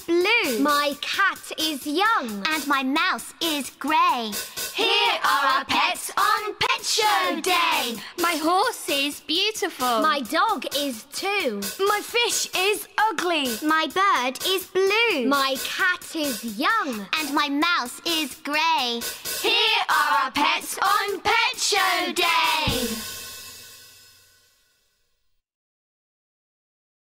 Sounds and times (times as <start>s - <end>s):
Music: 0.0s - 25.4s.